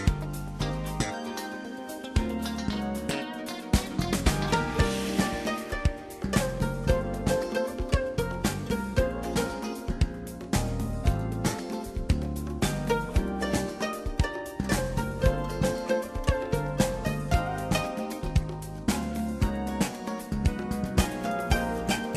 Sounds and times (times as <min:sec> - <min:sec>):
Music: 0:00.0 - 0:22.1.